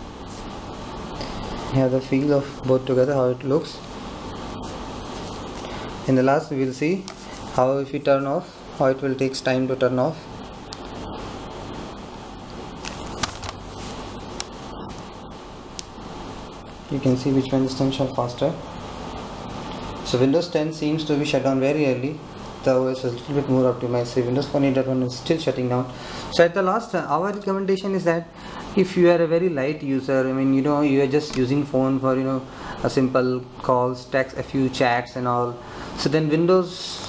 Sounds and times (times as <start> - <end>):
Inside, small room: 0.0 - 37.0
Speech: 1.7 - 3.9, 6.1 - 10.3, 16.9 - 18.7, 20.0 - 37.0.